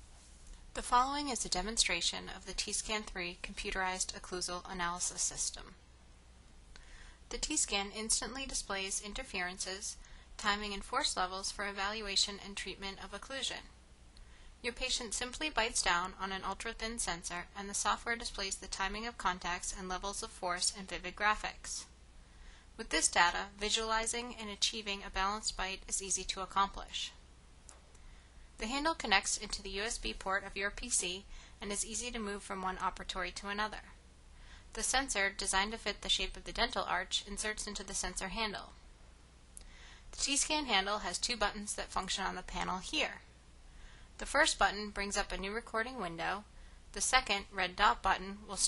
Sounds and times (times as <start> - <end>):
Speech: 0.8 - 5.8, 7.3 - 13.7, 14.6 - 21.9, 22.8 - 27.2, 28.6 - 34.0, 34.8 - 38.8, 40.2 - 43.2, 44.2 - 48.6.